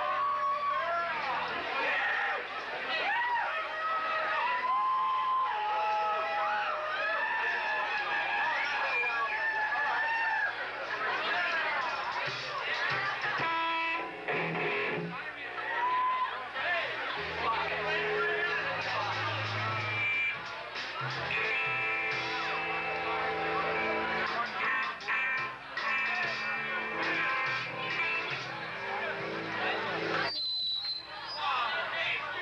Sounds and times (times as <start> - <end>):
Speech: 0.6 - 4.6, 7.4 - 13.6, 14.8 - 30.3, 31.0 - 32.4
Music: 10.9 - 16.0, 17.0 - 30.4.